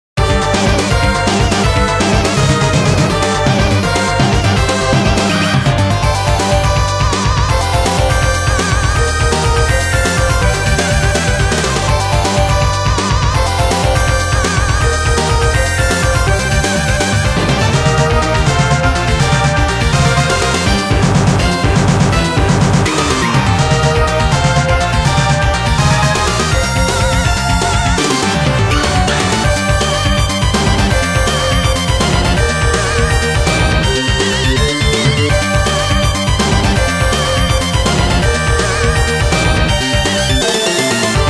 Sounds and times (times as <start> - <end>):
Music: 0.2 - 41.3.